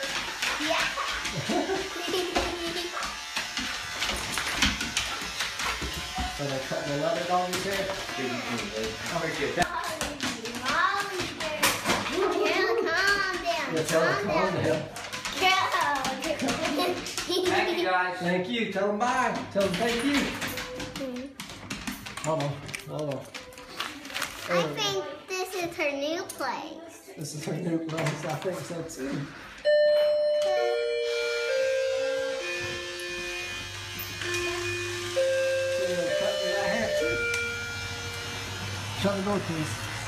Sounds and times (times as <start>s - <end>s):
Electric shaver, electric razor: 0.0s - 10.0s, 11.6s - 14.9s, 30.4s - 40.0s.